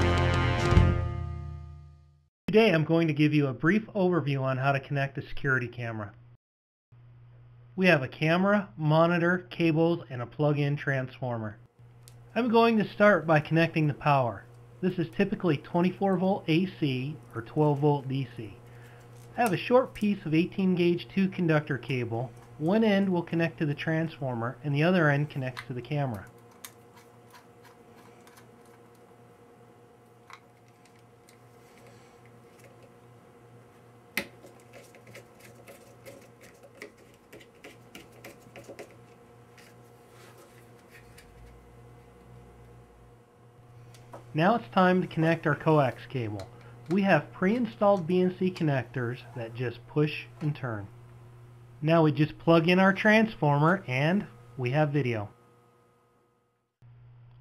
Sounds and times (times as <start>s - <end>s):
Speech: 2.5s - 6.2s, 7.8s - 11.6s, 12.4s - 18.6s, 19.4s - 26.3s, 44.4s - 50.9s, 51.8s - 55.4s.